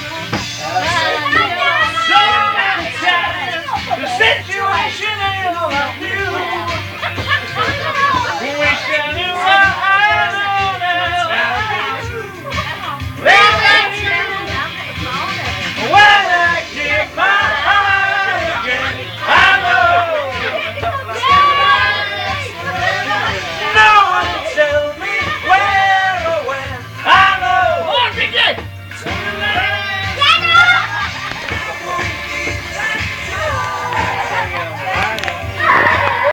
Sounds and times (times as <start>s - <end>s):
Music: 0.0s - 36.3s.